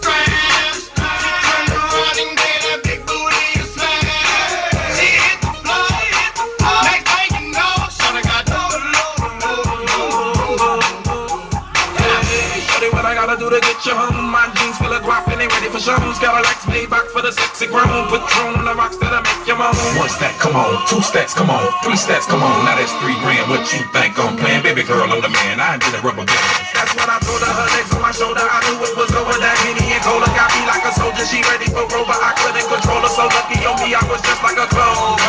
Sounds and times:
Music: 0:00.0 - 0:35.2
Singing: 0:00.0 - 0:35.2.

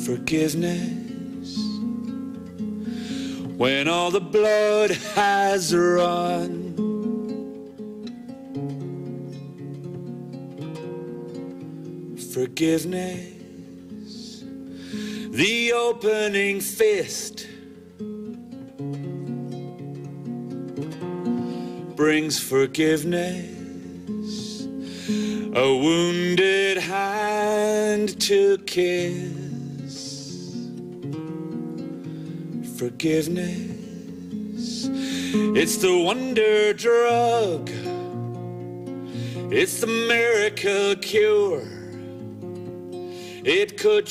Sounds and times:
Male singing: 0:00.0 - 0:01.9, 0:03.6 - 0:06.8, 0:12.2 - 0:14.4, 0:15.3 - 0:17.6, 0:22.0 - 0:24.7, 0:25.5 - 0:30.7, 0:32.7 - 0:37.9, 0:39.5 - 0:42.0, 0:43.4 - 0:44.1
Music: 0:00.0 - 0:44.1.

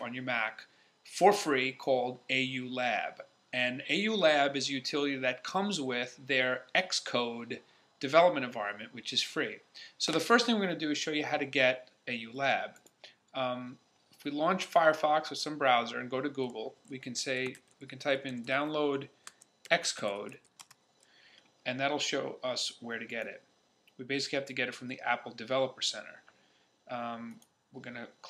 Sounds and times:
Speech: 0:00.0 - 0:12.8, 0:13.4 - 0:19.1, 0:19.7 - 0:20.4, 0:21.7 - 0:26.3, 0:26.9 - 0:28.2.

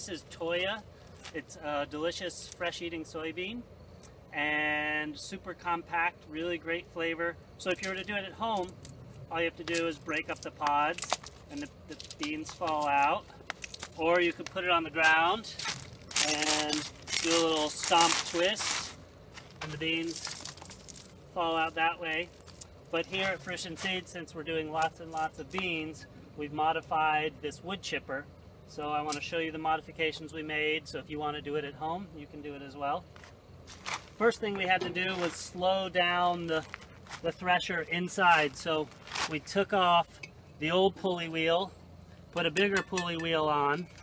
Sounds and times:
Speech: 0:00.0 - 0:03.6, 0:04.4 - 0:08.7, 0:09.3 - 0:13.3, 0:14.0 - 0:15.6, 0:16.2 - 0:18.8, 0:19.6 - 0:20.3, 0:21.4 - 0:22.3, 0:23.0 - 0:33.0, 0:34.2 - 0:41.7, 0:42.4 - 0:43.9.

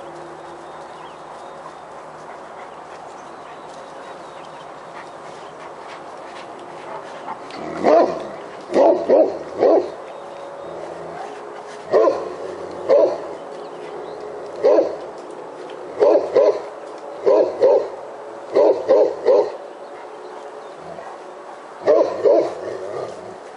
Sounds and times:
Dog: 0:01.6 - 0:10.0, 0:11.1 - 0:13.4, 0:14.6 - 0:15.0, 0:16.0 - 0:16.6, 0:17.2 - 0:19.6, 0:21.8 - 0:23.2.

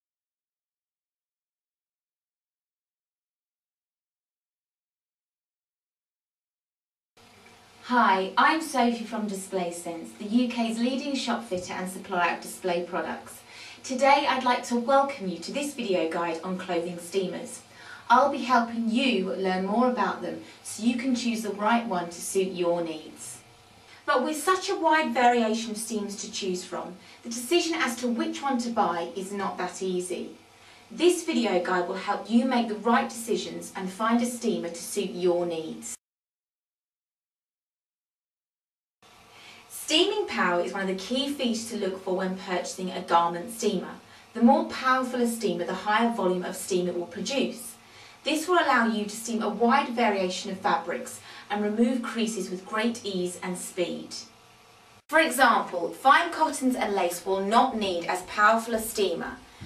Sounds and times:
Speech: 0:07.8 - 0:23.4, 0:24.0 - 0:36.0, 0:39.7 - 0:54.3, 0:55.1 - 0:59.6.

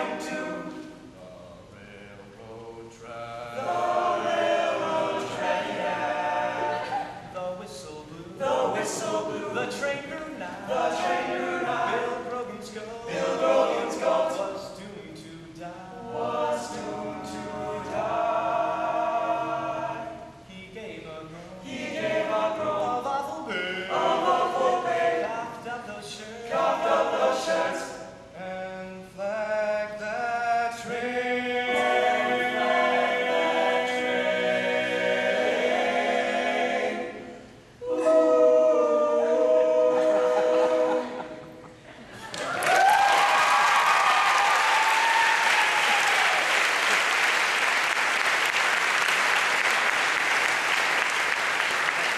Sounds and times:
Choir: 0:00.0 - 0:01.2, 0:01.8 - 0:52.1
Male singing: 0:12.0 - 0:13.1, 0:14.3 - 0:16.1, 0:25.2 - 0:26.5, 0:28.4 - 0:31.2.

